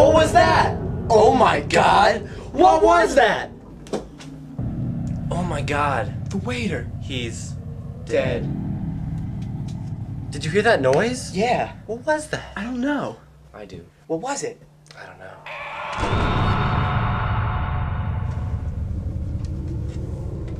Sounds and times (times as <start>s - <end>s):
Rumble: 0.0s - 12.6s, 15.4s - 20.5s
Speech: 5.3s - 8.5s.